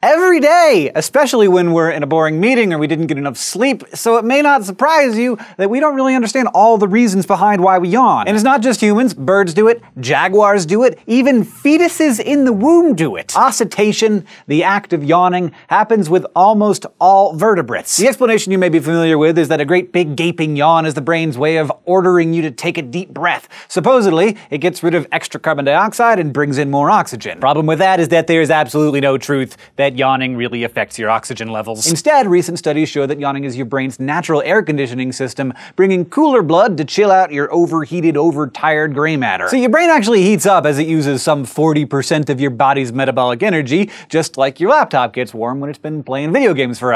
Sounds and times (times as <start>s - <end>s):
Speech: 0.0s - 46.9s.